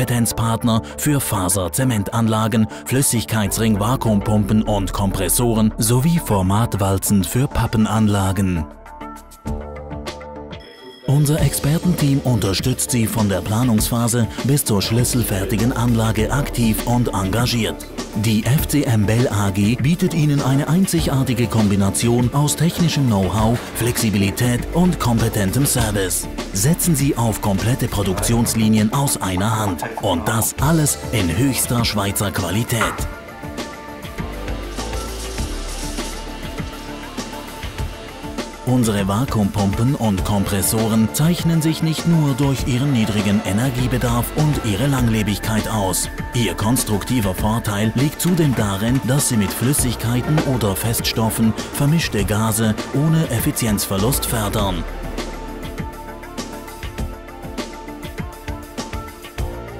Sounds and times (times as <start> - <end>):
Speech: 0.0 - 8.7, 11.0 - 33.1, 38.7 - 54.9
Music: 0.0 - 59.7.